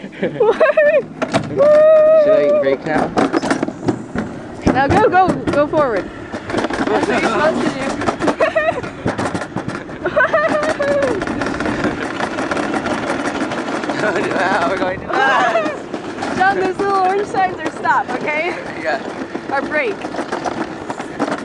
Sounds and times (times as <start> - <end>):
Outside, rural or natural: 0.0 - 21.4.